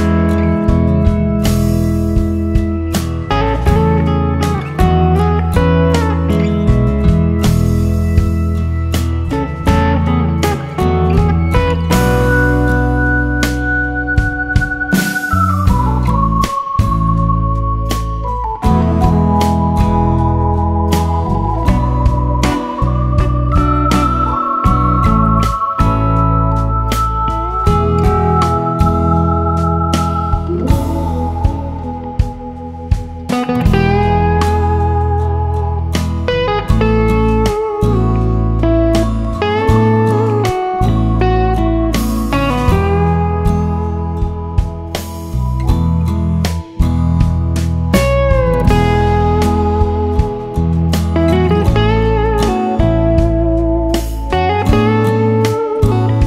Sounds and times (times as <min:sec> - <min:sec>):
Music: 0:00.0 - 0:56.2.